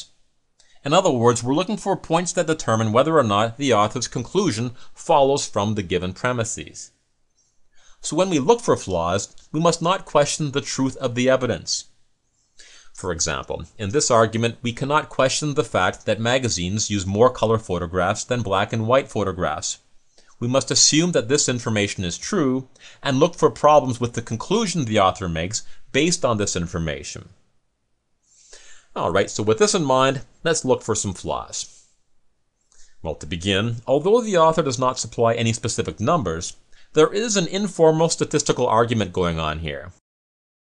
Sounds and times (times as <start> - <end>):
Speech: 0.8 - 7.0, 8.0 - 11.9, 13.0 - 19.8, 20.4 - 27.4, 28.9 - 31.8, 33.0 - 40.0.